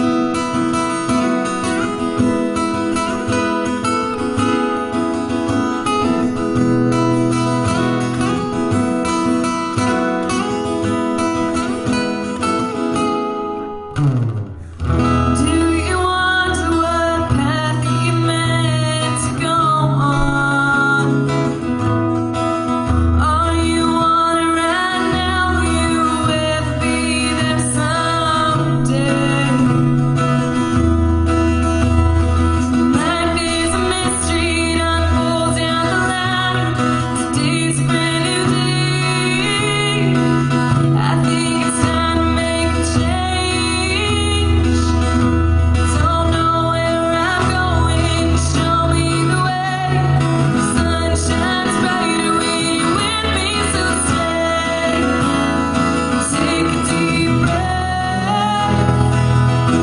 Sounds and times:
Acoustic guitar: 0:00.0 - 0:59.8
Singing: 0:46.0 - 0:59.8.

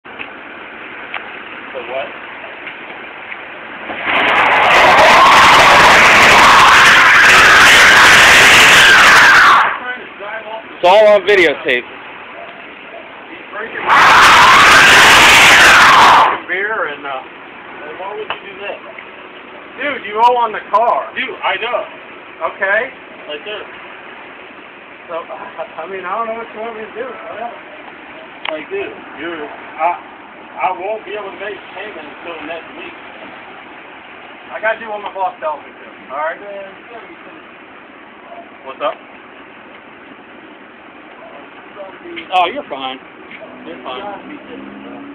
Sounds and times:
Car: 0:00.0 - 0:45.1
Speech: 0:34.5 - 0:37.5, 0:41.2 - 0:43.0.

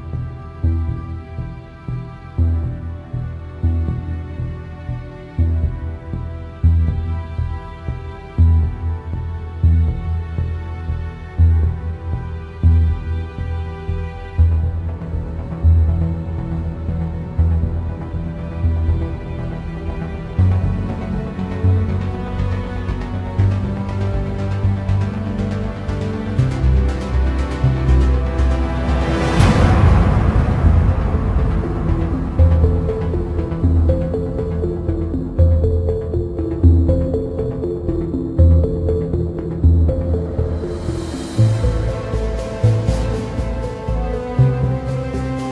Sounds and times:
Background music: 0:00.0 - 0:45.5.

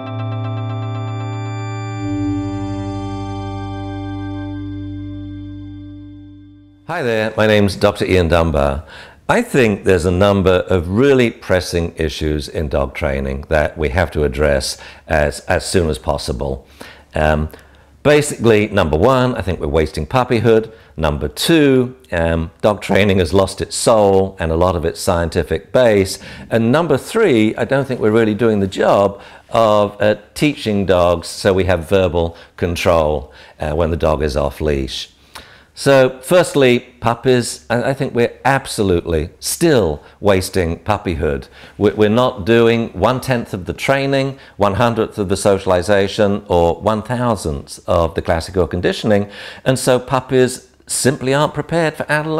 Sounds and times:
Speech: 0:06.9 - 0:35.2, 0:35.8 - 0:52.3.

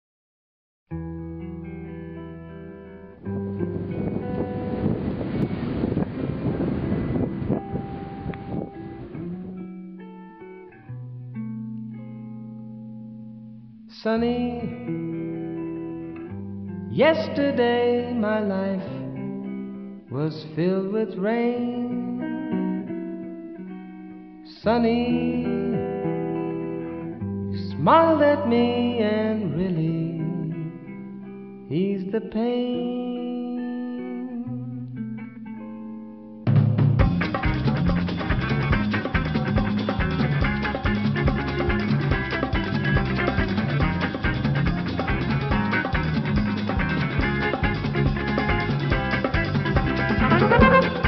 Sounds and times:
Music: 0:00.9 - 0:51.0
Outside, rural or natural: 0:03.4 - 0:09.7.

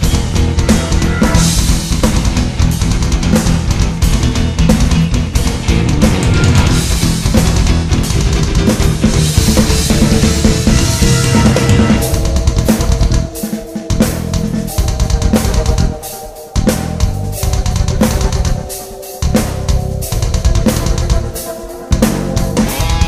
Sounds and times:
Drum: 0:00.0 - 0:23.0
Drum kit: 0:00.0 - 0:23.0.

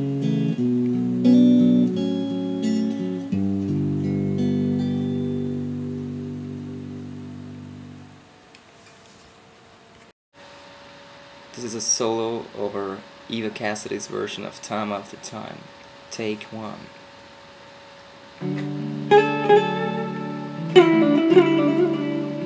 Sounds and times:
Acoustic guitar: 0:00.0 - 0:08.1, 0:18.4 - 0:22.4
Speech: 0:11.5 - 0:16.9.

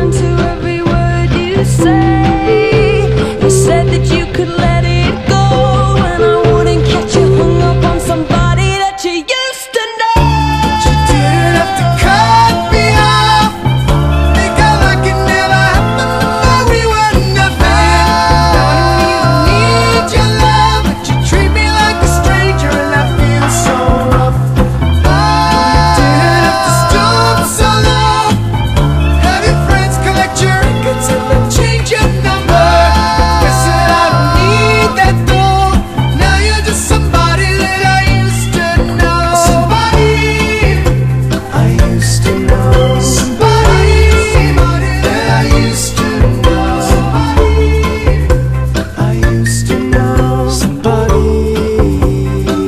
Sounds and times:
Independent music: 0:00.0 - 0:52.6.

